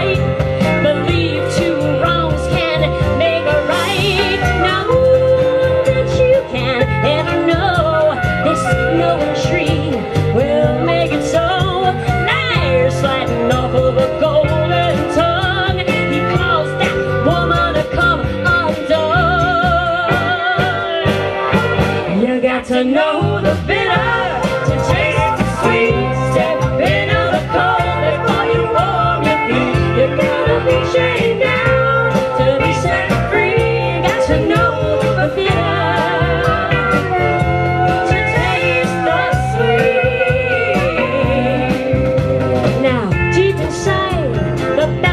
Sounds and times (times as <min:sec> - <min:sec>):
Music: 0:00.0 - 0:45.1
Singing: 0:22.2 - 0:44.1.